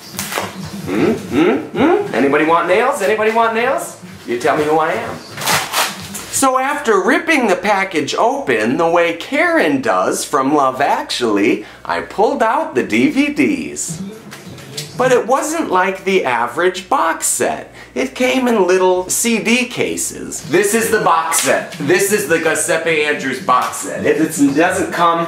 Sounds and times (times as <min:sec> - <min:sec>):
Music: 0:00.0 - 0:10.3, 0:12.3 - 0:16.9, 0:19.0 - 0:25.2
Speech: 0:00.9 - 0:05.3, 0:06.3 - 0:25.2.